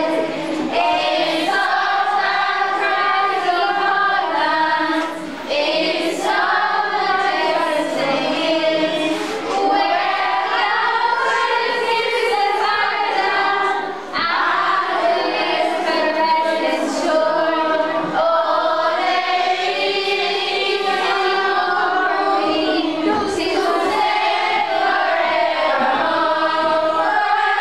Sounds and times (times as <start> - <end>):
Choir: 0.0 - 27.6.